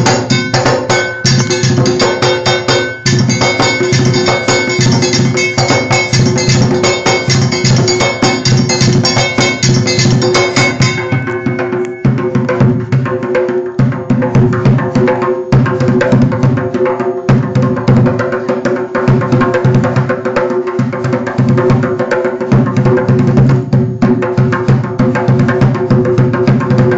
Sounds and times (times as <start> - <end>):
Percussion: 0.0 - 26.9.